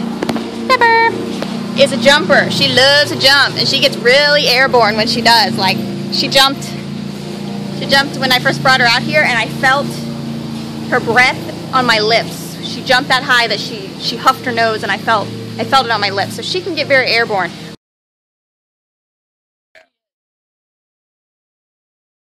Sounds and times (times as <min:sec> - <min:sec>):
Speech: 0:00.7 - 0:01.2, 0:01.8 - 0:06.8, 0:07.8 - 0:10.1, 0:10.9 - 0:17.6.